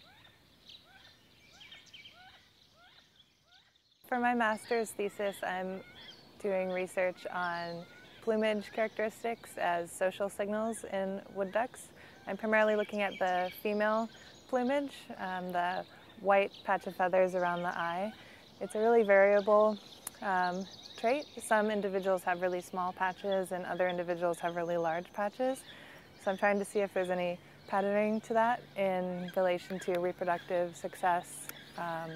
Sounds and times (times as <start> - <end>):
Speech: 4.1 - 5.8, 6.4 - 32.1.